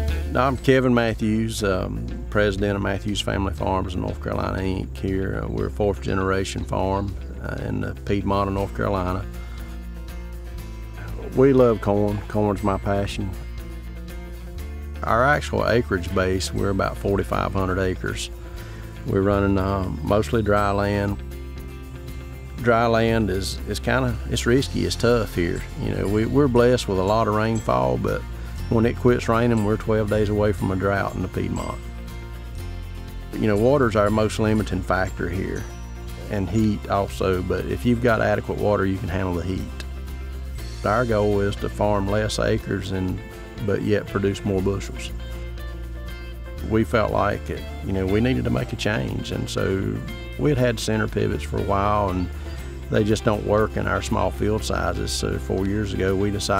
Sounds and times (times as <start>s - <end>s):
Music: 0.0s - 56.6s
Speech: 0.3s - 9.3s, 11.0s - 13.4s, 15.0s - 18.3s, 19.0s - 21.2s, 22.6s - 31.8s, 33.3s - 35.7s, 36.3s - 39.8s, 40.8s - 45.2s, 46.6s - 56.6s.